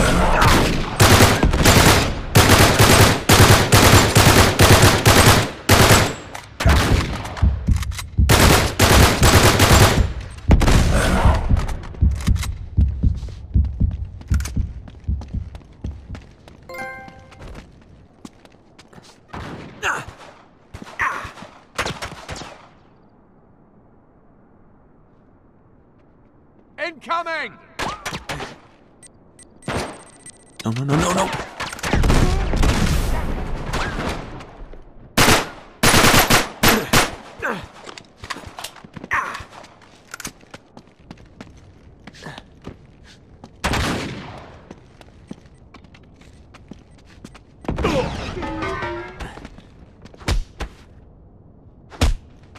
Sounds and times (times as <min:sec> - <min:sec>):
Fusillade: 0:00.4 - 0:07.0, 0:08.3 - 0:11.0, 0:35.2 - 0:37.2.